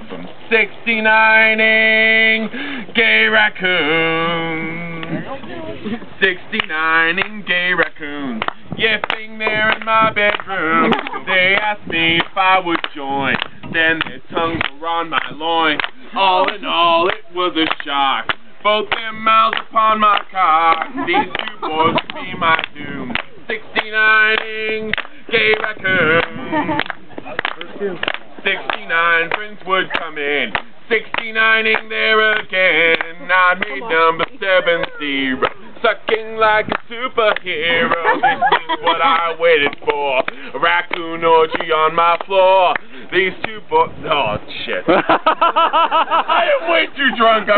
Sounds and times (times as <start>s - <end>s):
Male singing: 0.5s - 26.9s, 28.4s - 44.7s.